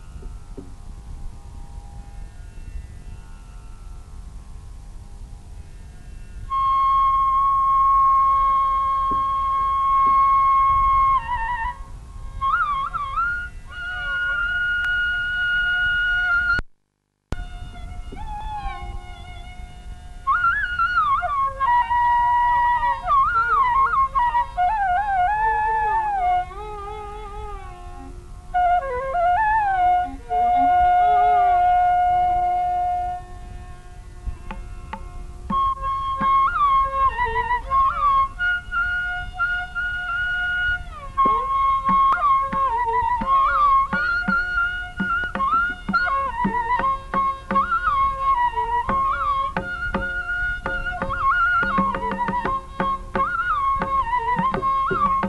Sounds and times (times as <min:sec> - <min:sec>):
Flute: 0:05.6 - 0:16.7, 0:17.4 - 0:55.2.